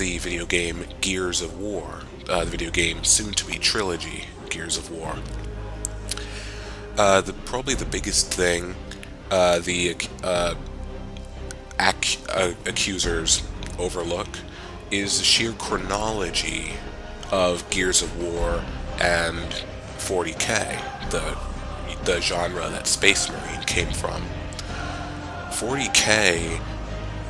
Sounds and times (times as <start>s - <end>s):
Speech: 0.0s - 5.2s, 7.0s - 10.6s, 11.7s - 24.3s, 25.5s - 26.6s
Music: 0.0s - 27.3s.